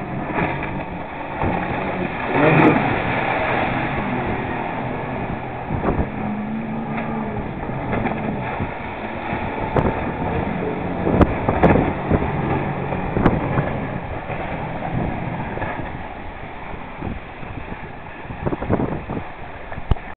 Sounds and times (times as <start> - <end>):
Motorboat, speedboat: 0.0 - 20.1.